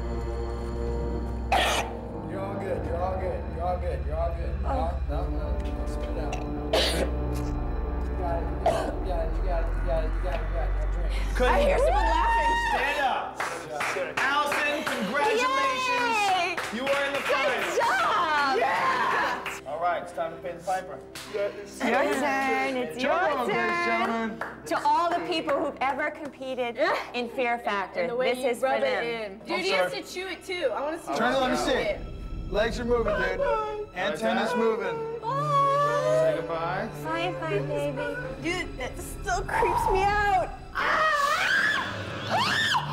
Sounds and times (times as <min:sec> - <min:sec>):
Female speech, woman speaking: 0:15.3 - 0:16.6, 0:21.8 - 0:24.1, 0:24.7 - 0:30.9, 0:37.0 - 0:40.6.